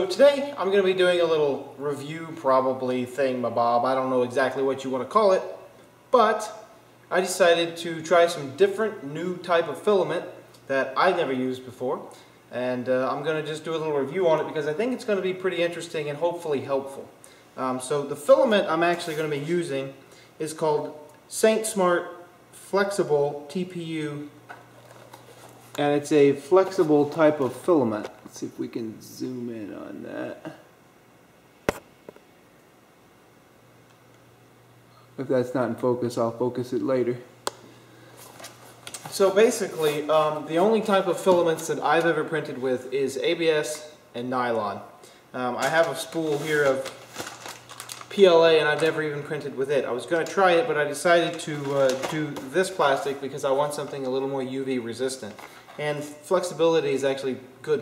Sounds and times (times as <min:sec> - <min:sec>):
Speech: 0:00.0 - 0:24.4, 0:25.8 - 0:30.7, 0:35.2 - 0:37.3, 0:39.1 - 0:47.0, 0:48.1 - 0:57.8.